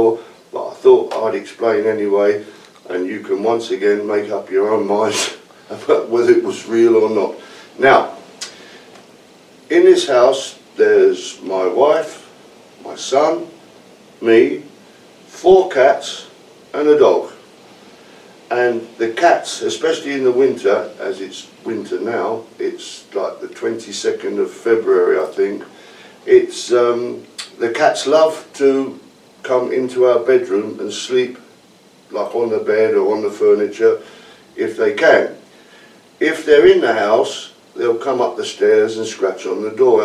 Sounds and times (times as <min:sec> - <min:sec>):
Speech: 0:00.0 - 0:08.2, 0:09.7 - 0:13.6, 0:14.2 - 0:17.4, 0:18.5 - 0:31.5, 0:32.1 - 0:35.4, 0:36.2 - 0:40.0.